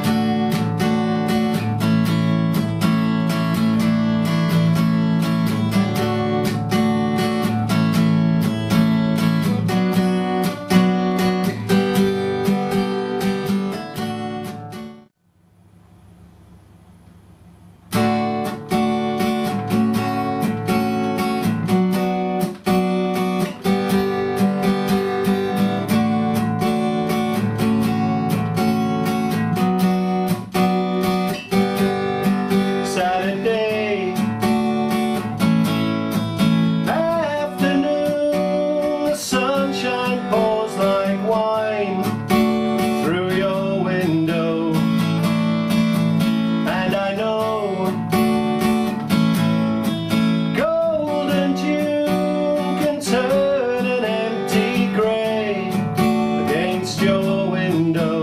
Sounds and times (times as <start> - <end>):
Acoustic guitar: 0.0 - 15.2, 17.0 - 58.2.